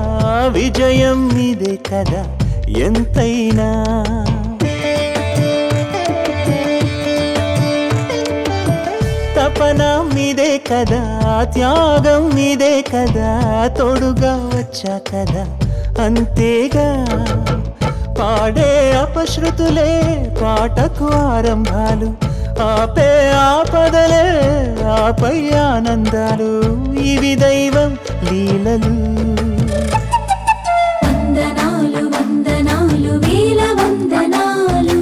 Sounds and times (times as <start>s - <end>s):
Carnatic music: 0.0s - 35.0s.